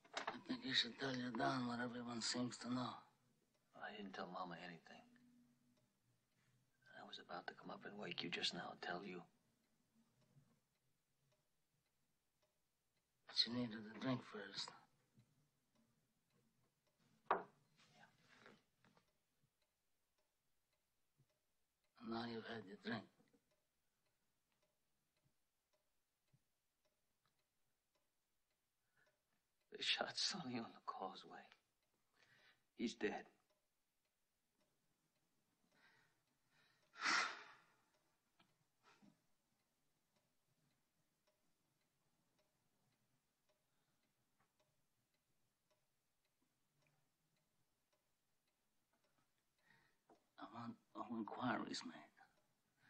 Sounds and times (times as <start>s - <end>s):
Inside, small room: 0.0s - 52.8s
Speech: 0.3s - 3.1s, 3.8s - 5.1s, 6.9s - 9.3s, 13.3s - 14.9s, 22.0s - 23.2s, 29.8s - 31.5s, 32.8s - 33.4s, 50.4s - 52.3s.